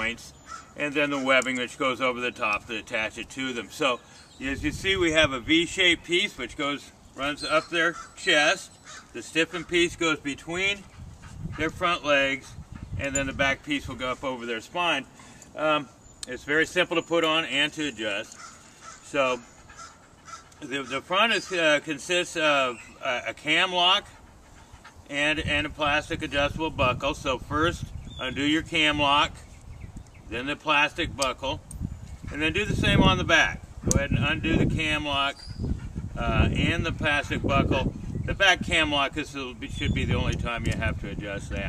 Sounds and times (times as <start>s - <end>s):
Outside, rural or natural: 0.0s - 41.6s
Speech: 11.6s - 18.3s, 19.1s - 19.4s, 20.6s - 24.1s, 25.1s - 29.4s, 30.3s - 31.6s, 32.3s - 35.4s, 36.2s - 41.6s
Animal: 18.2s - 25.4s.